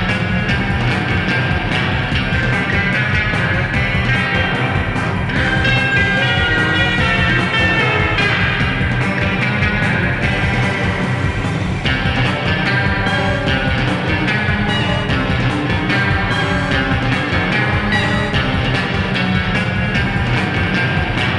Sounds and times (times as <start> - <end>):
Sampler: 0.0 - 21.3.